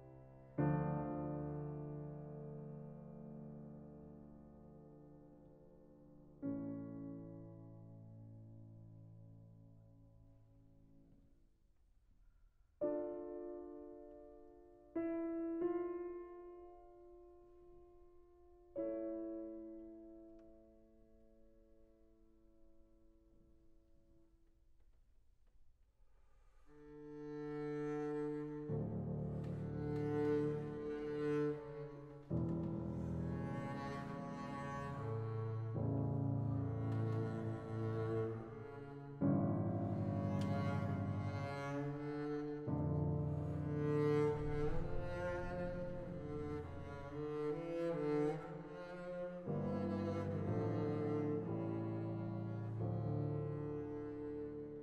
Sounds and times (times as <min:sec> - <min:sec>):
Music: 0:00.0 - 0:54.8.